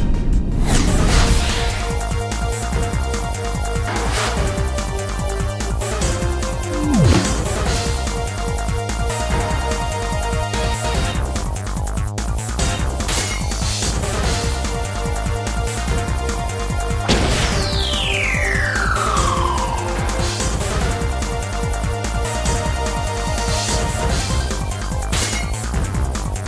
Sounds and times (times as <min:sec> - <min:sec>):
Music: 0:00.0 - 0:26.4.